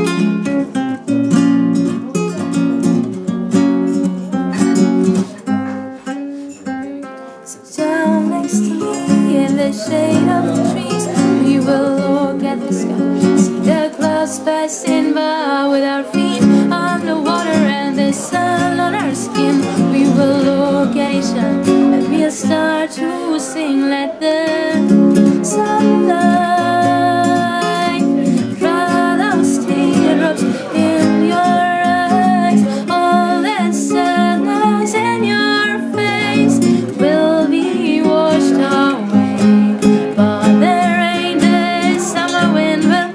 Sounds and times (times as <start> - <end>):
Acoustic guitar: 0.0 - 43.1.